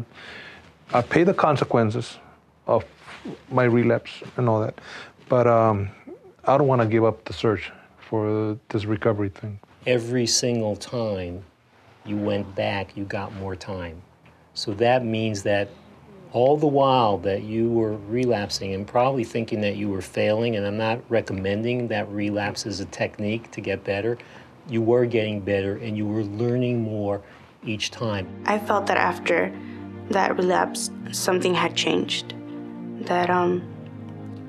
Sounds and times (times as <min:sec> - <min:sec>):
Speech: 0:00.9 - 0:14.0, 0:14.6 - 0:15.7, 0:16.3 - 0:29.5.